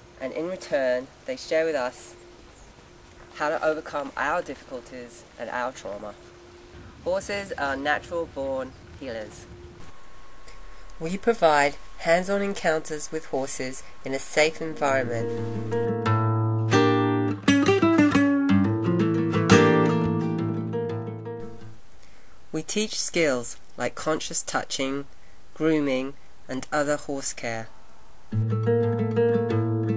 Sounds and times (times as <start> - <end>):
Speech: 0.2 - 2.2, 3.4 - 6.2, 7.0 - 9.5, 11.0 - 15.5, 22.6 - 27.7.